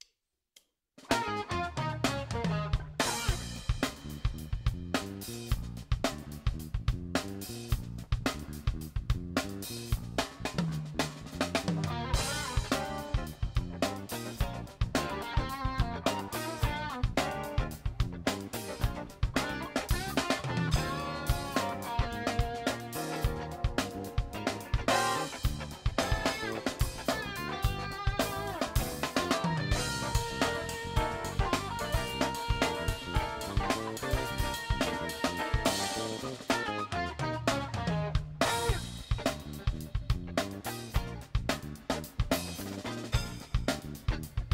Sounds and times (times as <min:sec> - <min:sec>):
Drum: 0:01.0 - 0:44.5
Drum kit: 0:01.0 - 0:44.5.